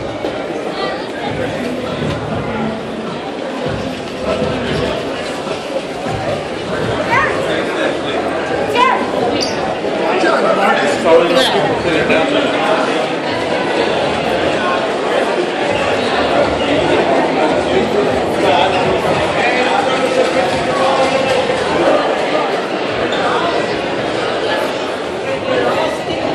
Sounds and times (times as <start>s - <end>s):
Speech: 0.0s - 26.3s.